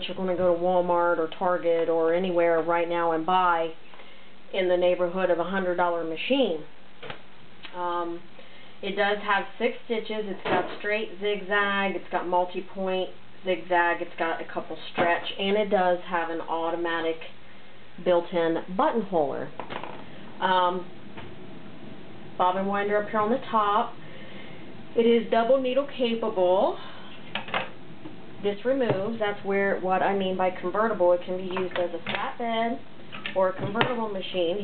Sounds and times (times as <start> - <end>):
Speech: 0.0 - 3.8, 4.5 - 6.7, 7.7 - 17.4, 18.0 - 19.5, 20.4 - 20.9, 22.4 - 24.0, 25.0 - 27.0, 28.4 - 34.6.